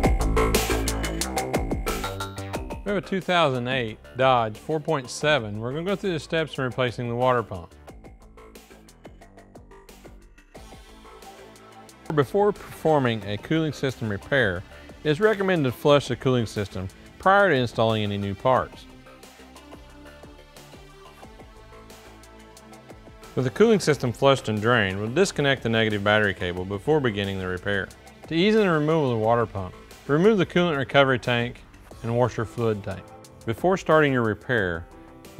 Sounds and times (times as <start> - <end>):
Music: 0.0 - 35.3
Speech: 2.9 - 7.7, 12.1 - 18.8, 23.4 - 34.9.